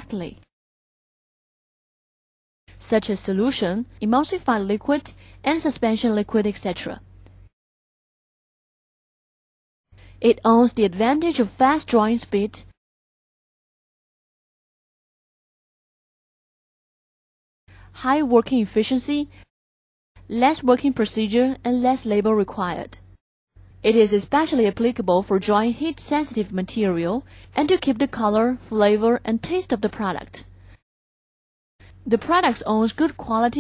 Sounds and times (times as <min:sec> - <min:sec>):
Speech: 0:00.0 - 0:00.4, 0:02.8 - 0:07.0, 0:10.2 - 0:12.8, 0:18.0 - 0:19.3, 0:20.3 - 0:23.0, 0:23.8 - 0:30.5, 0:32.1 - 0:33.6.